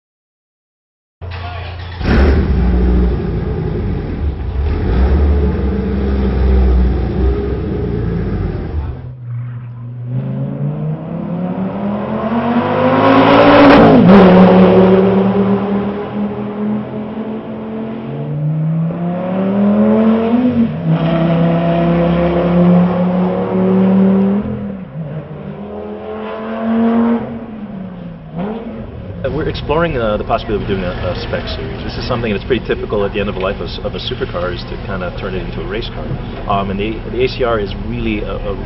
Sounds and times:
Outside, urban or manmade: 0:01.2 - 0:38.6
Race car, auto racing: 0:01.2 - 0:38.6.

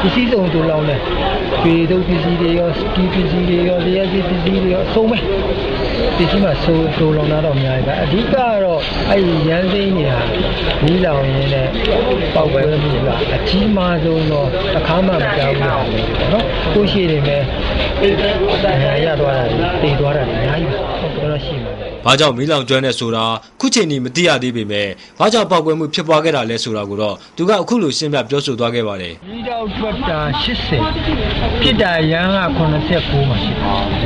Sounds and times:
Speech: 0:00.0 - 0:01.0, 0:01.6 - 0:05.3, 0:06.0 - 0:34.0.

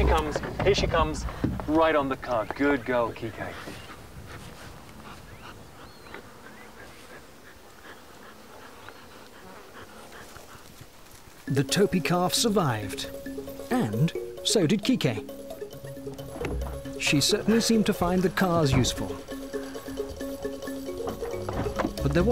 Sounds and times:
Speech: 0:00.0 - 0:03.7, 0:11.5 - 0:13.1, 0:13.7 - 0:15.2, 0:17.0 - 0:19.2, 0:22.0 - 0:22.3
Outside, rural or natural: 0:00.0 - 0:22.3
Music: 0:11.5 - 0:22.3.

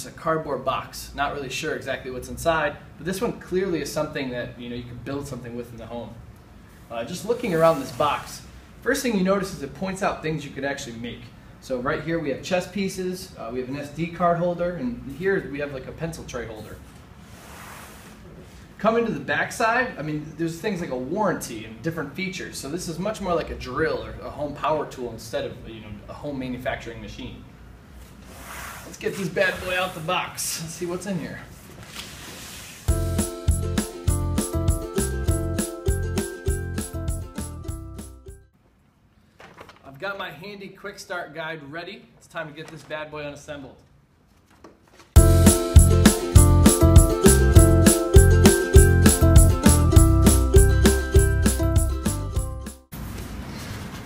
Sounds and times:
Speech: 0:00.0 - 0:06.2, 0:06.9 - 0:16.8, 0:18.8 - 0:27.5, 0:28.8 - 0:31.5, 0:39.8 - 0:43.9.

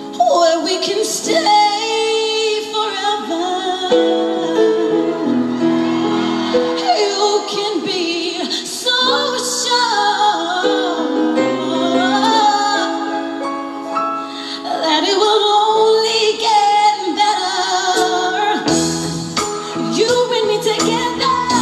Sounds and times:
Music: 0:00.0 - 0:21.6
Female singing: 0:00.1 - 0:05.1, 0:06.8 - 0:13.3, 0:14.6 - 0:18.7, 0:19.8 - 0:21.6.

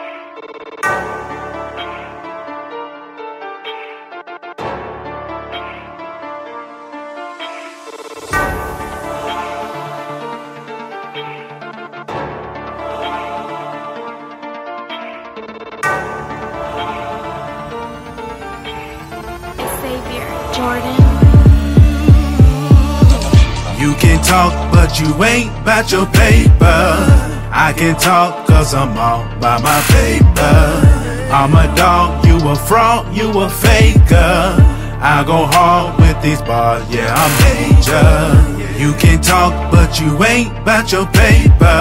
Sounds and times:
Soundtrack music: 0:00.0 - 0:41.8.

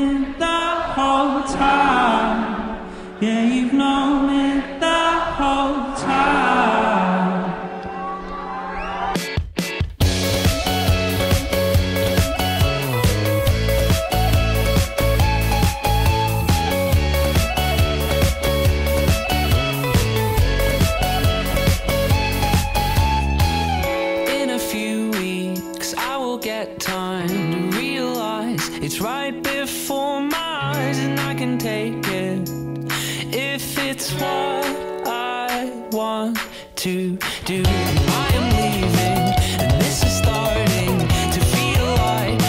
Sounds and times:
Music: 0:06.0 - 0:42.4.

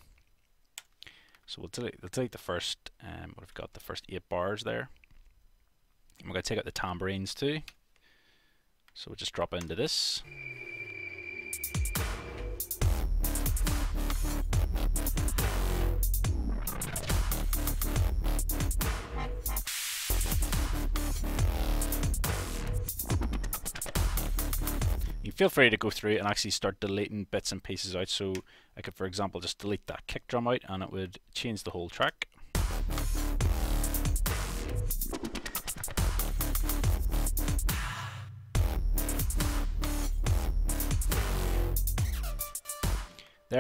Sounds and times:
Speech: 0:01.5 - 0:05.0, 0:06.2 - 0:07.8, 0:09.0 - 0:10.3, 0:25.2 - 0:32.3.

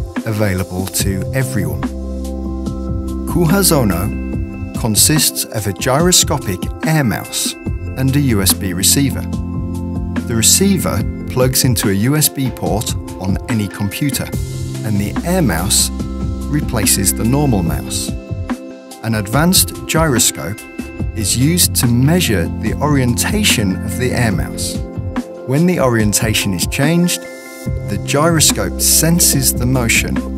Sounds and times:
Music: 0:00.0 - 0:30.3
Speech: 0:00.2 - 0:01.9, 0:03.3 - 0:04.2, 0:04.8 - 0:09.3, 0:10.3 - 0:15.9, 0:16.5 - 0:18.2, 0:19.0 - 0:20.6, 0:21.2 - 0:24.8, 0:25.5 - 0:27.2, 0:27.9 - 0:30.3.

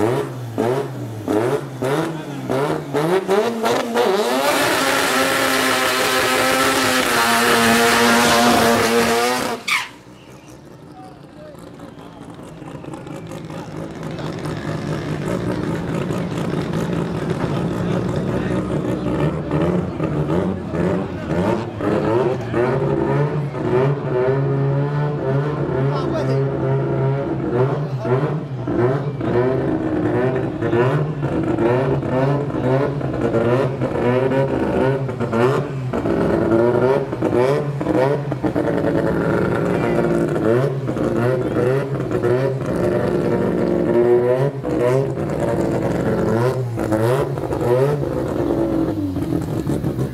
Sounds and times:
Speech: 0:10.2 - 0:22.8, 0:25.8 - 0:26.6, 0:27.7 - 0:29.6, 0:39.6 - 0:40.2.

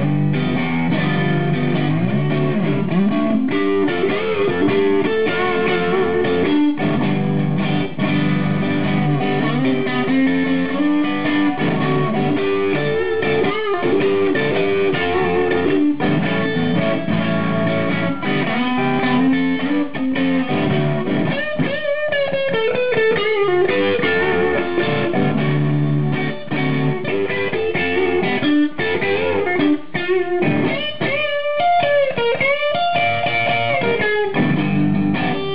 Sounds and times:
Music: 0:00.0 - 0:35.5.

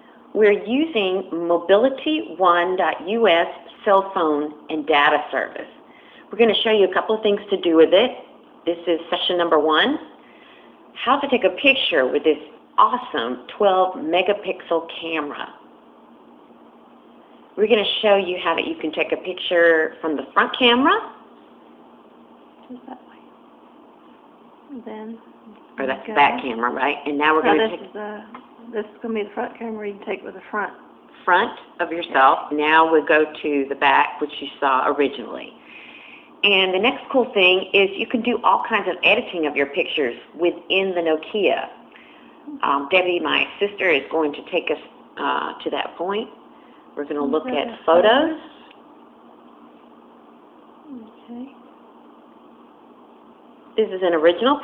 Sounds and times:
Speech: 0:11.0 - 0:15.6, 0:24.7 - 0:35.6, 0:36.4 - 0:41.8, 0:42.5 - 0:46.4, 0:47.0 - 0:48.5, 0:53.8 - 0:54.6.

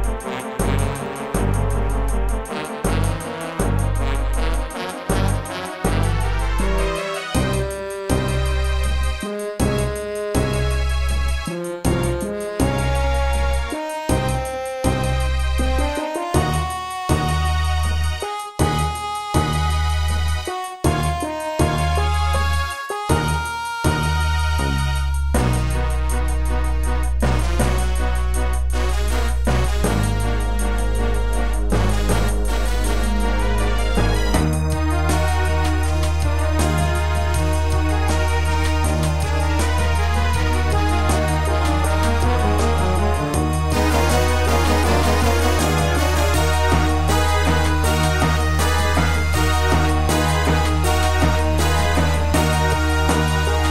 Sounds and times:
Background music: 0:00.0 - 0:53.7.

